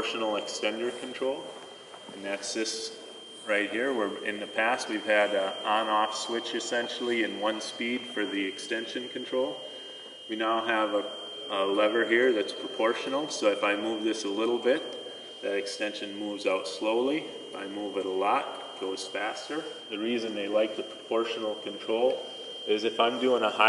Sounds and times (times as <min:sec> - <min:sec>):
Speech: 0:00.0 - 0:01.5, 0:02.1 - 0:09.7, 0:10.3 - 0:23.6.